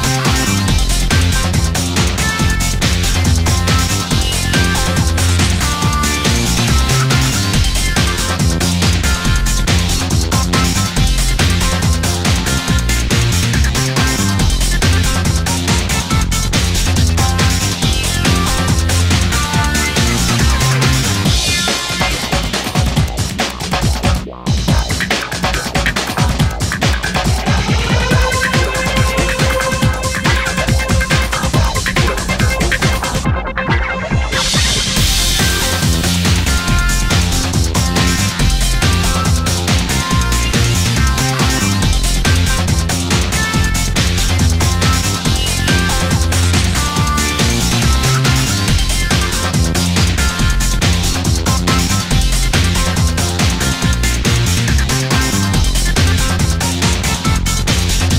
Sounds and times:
Exciting music: 0.0 - 58.1
Soundtrack music: 0.0 - 58.1.

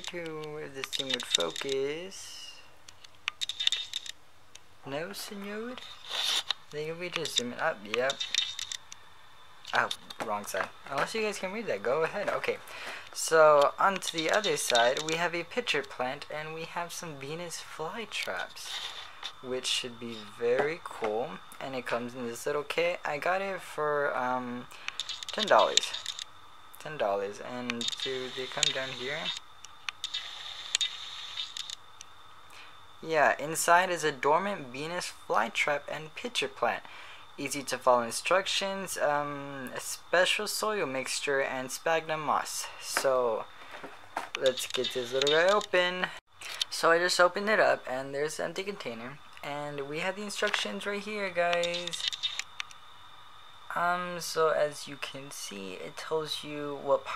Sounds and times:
Speech: 0.0 - 2.7, 4.9 - 5.8, 6.8 - 8.2, 9.7 - 18.8, 19.4 - 24.7, 25.4 - 26.0, 26.8 - 29.4, 33.0 - 43.5, 44.4 - 52.0, 53.7 - 57.1.

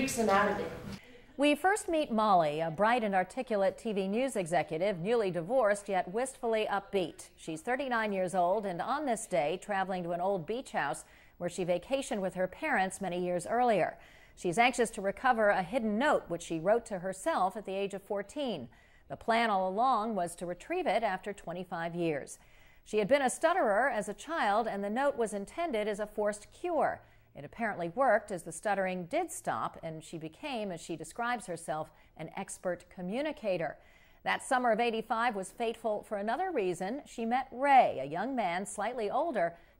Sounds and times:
Speech: 0.0 - 11.0.

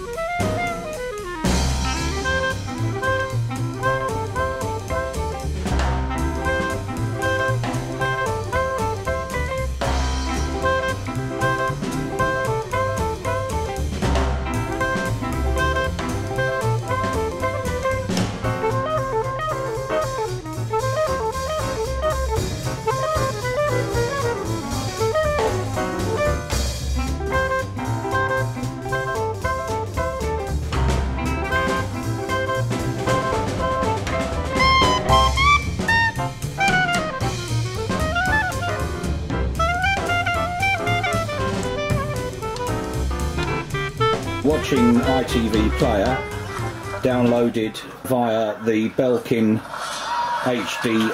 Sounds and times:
Music: 0.0 - 51.1.

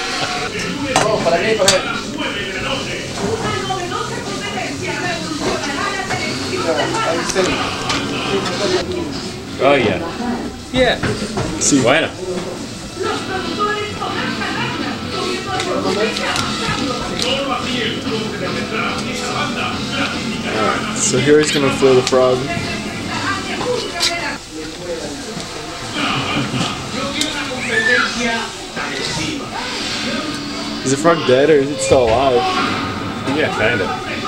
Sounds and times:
Music: 13.0 - 24.3.

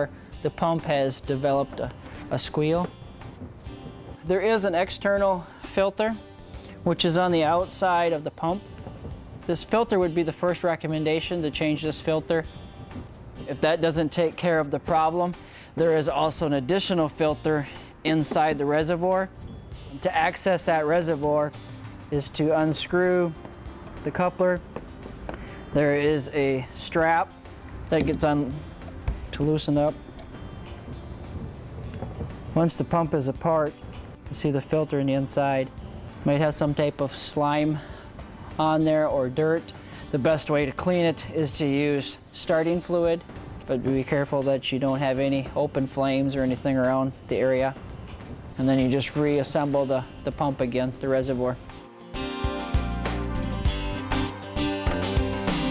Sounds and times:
Speech: 0.0 - 2.9, 4.3 - 6.2, 6.9 - 8.6, 9.5 - 12.5, 13.5 - 19.3, 20.0 - 21.5, 22.1 - 23.4, 24.0 - 24.6, 25.8 - 27.3, 27.9 - 28.6, 29.3 - 30.0, 32.6 - 37.8, 38.6 - 47.8, 48.6 - 51.6
Music: 0.0 - 55.7.

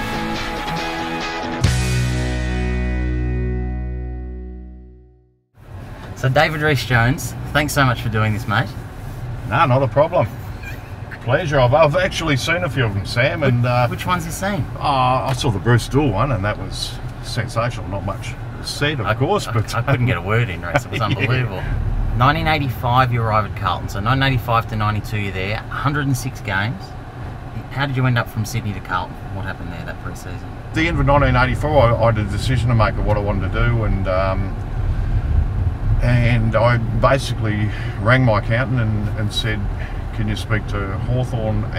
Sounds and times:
Car: 5.6 - 41.7.

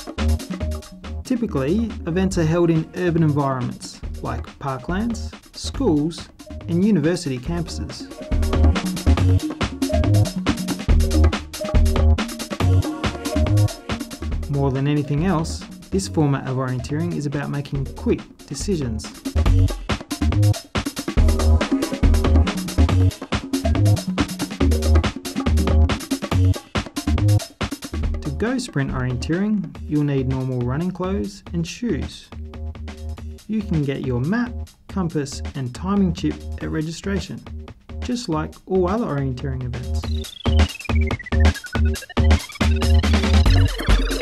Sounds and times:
Music: 0.0 - 44.2
Speech: 1.3 - 8.1, 14.5 - 19.2, 28.2 - 32.4, 33.5 - 40.1.

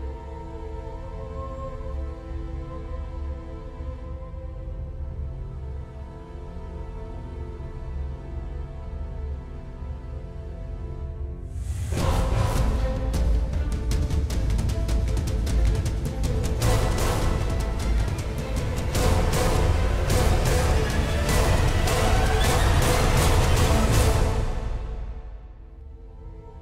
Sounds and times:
Music: 0.0 - 26.6.

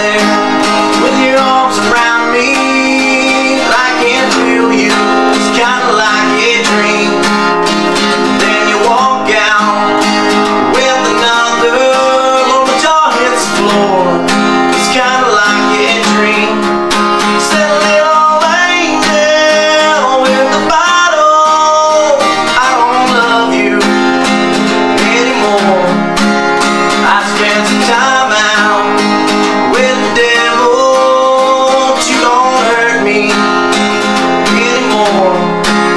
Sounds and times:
Music: 0.0 - 35.9.

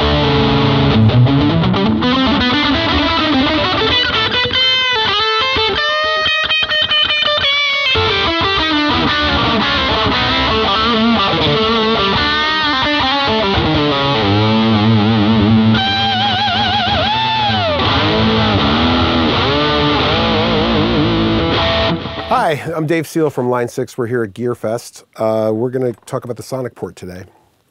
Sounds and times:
Music: 0.0 - 22.4
Speech: 22.3 - 27.4.

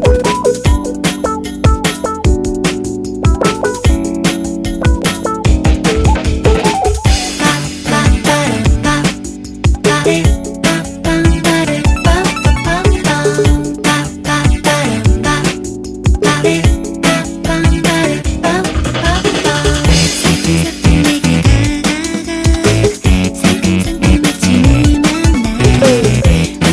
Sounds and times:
Music: 0.0 - 26.7.

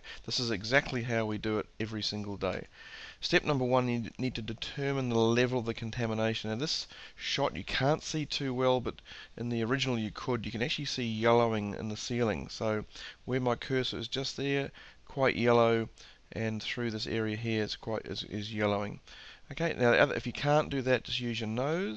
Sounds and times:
Speech: 0.2 - 21.9.

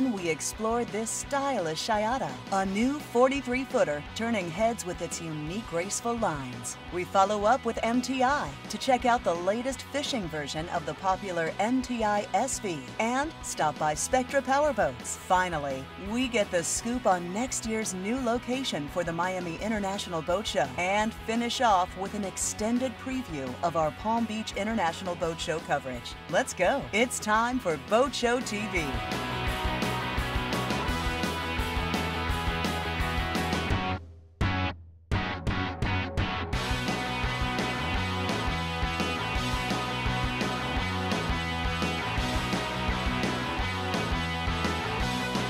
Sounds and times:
Speech: 0.0 - 29.1
Music: 0.0 - 45.4.

